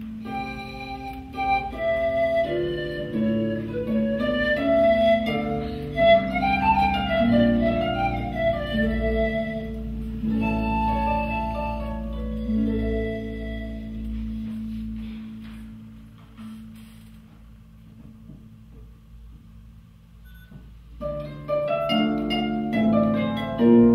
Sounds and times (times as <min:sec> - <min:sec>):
Pizzicato: 0:00.0 - 0:16.8, 0:21.0 - 0:23.9
Harp: 0:00.0 - 0:19.0, 0:21.0 - 0:23.9.